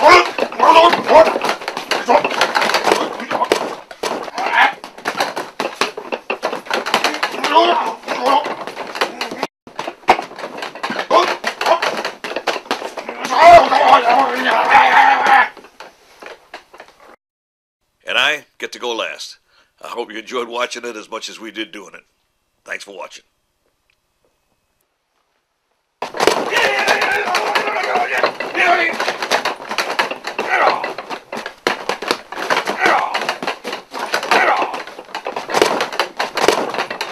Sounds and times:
Speech: 0:00.0 - 0:01.4, 0:07.3 - 0:08.5, 0:13.1 - 0:15.5, 0:18.0 - 0:23.3, 0:26.5 - 0:29.0.

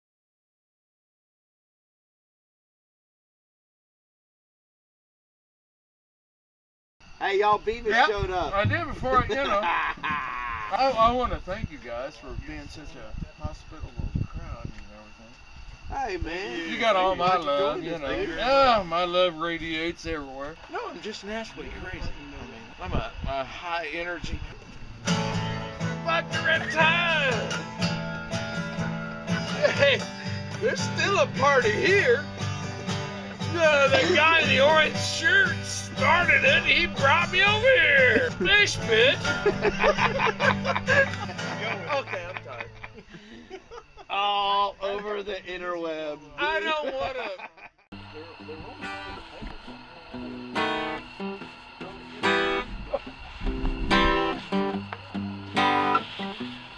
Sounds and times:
Speech: 0:07.2 - 0:09.7, 0:10.7 - 0:24.7, 0:26.1 - 0:27.5, 0:30.6 - 0:32.2, 0:33.5 - 0:39.2, 0:41.4 - 0:42.7, 0:44.1 - 0:50.4
Music: 0:25.0 - 0:42.6, 0:48.4 - 0:56.7.

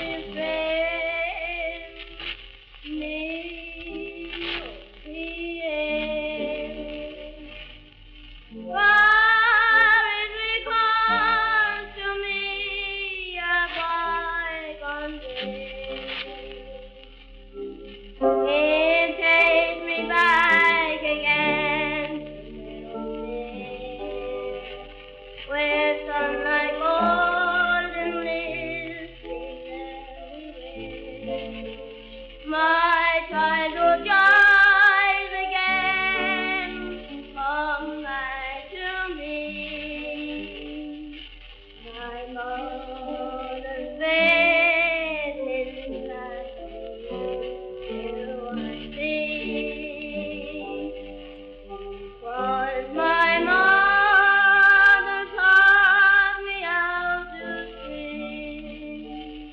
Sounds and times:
Lullaby: 0:00.0 - 0:07.9, 0:08.8 - 0:59.5.

